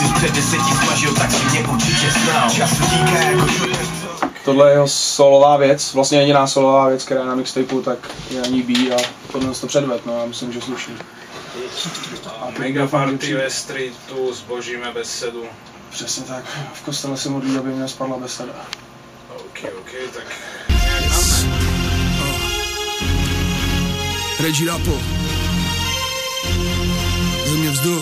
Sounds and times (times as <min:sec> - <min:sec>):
Music: 0:00.0 - 0:04.4, 0:20.7 - 0:28.0
Speech: 0:04.4 - 0:18.7, 0:19.3 - 0:21.5, 0:24.4 - 0:25.0, 0:27.4 - 0:28.0.